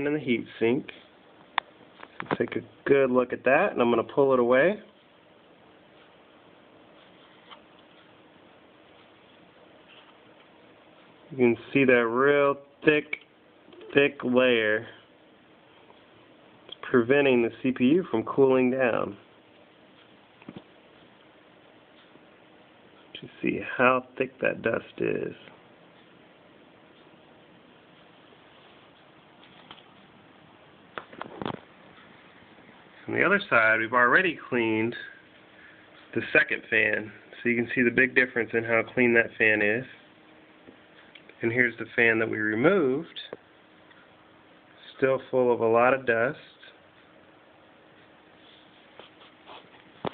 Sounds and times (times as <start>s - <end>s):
Speech: 0.0s - 1.1s, 2.2s - 5.0s, 11.3s - 15.0s, 16.8s - 19.3s, 23.2s - 25.6s, 33.0s - 35.2s, 36.1s - 40.0s, 41.4s - 43.4s, 44.8s - 46.8s.